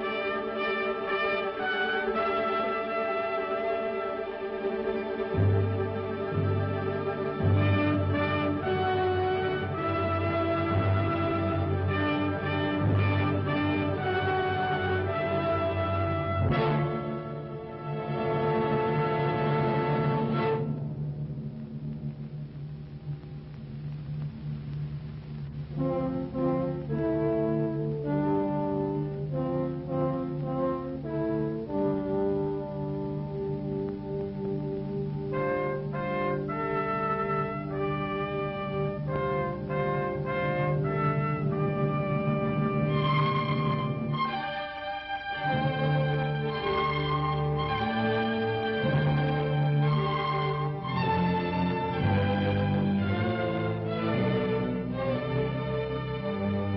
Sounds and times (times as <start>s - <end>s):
Music: 0.0s - 56.7s.